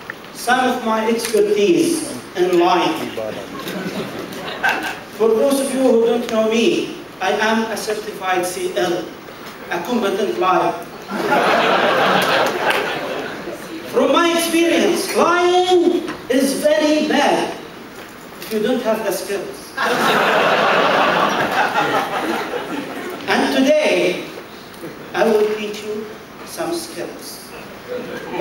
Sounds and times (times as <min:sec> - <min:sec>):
Narration, monologue: 0:00.0 - 0:27.9
Male speech, man speaking: 0:00.4 - 0:03.5, 0:05.2 - 0:09.1, 0:09.7 - 0:10.8, 0:13.9 - 0:17.6, 0:18.5 - 0:19.8, 0:23.3 - 0:24.3, 0:25.1 - 0:28.4.